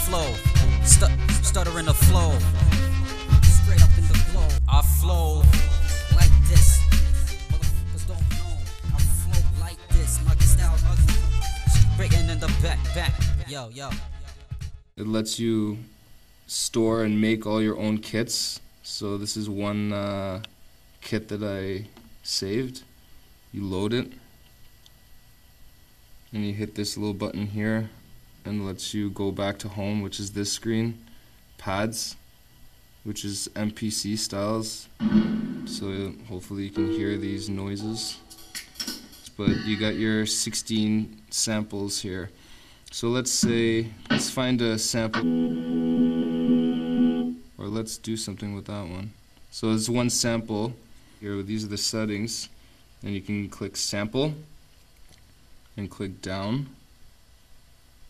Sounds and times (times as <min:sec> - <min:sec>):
Speech: 0:00.0 - 0:14.0, 0:15.0 - 0:22.9, 0:23.5 - 0:24.3, 0:26.3 - 0:32.2, 0:33.0 - 0:35.0, 0:35.7 - 0:38.3, 0:39.3 - 0:45.2, 0:47.6 - 0:54.5, 0:55.8 - 0:56.8
Music: 0:00.0 - 0:15.0, 0:36.6 - 0:40.3, 0:45.2 - 0:47.5.